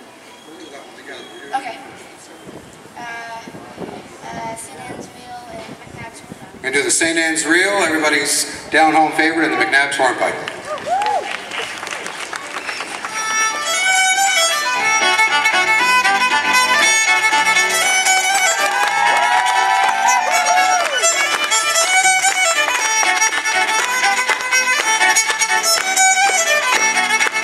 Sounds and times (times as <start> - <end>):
Violin, fiddle: 12.9 - 27.4.